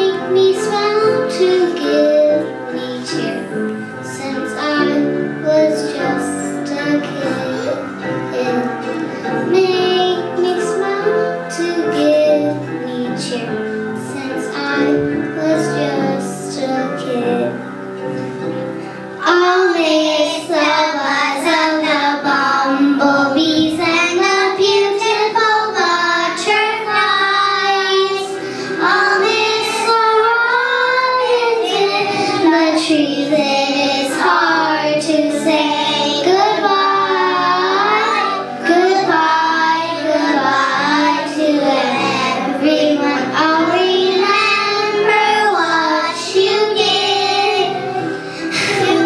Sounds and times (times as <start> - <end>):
Child singing: 0.0 - 17.6, 19.2 - 49.0
Music: 0.0 - 49.0.